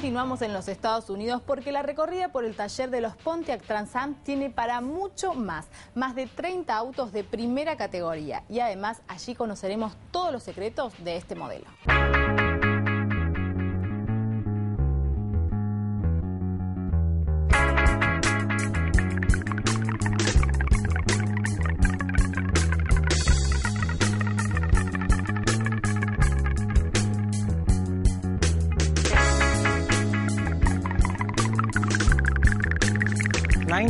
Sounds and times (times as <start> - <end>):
Music: 0.0 - 9.2, 9.8 - 33.9.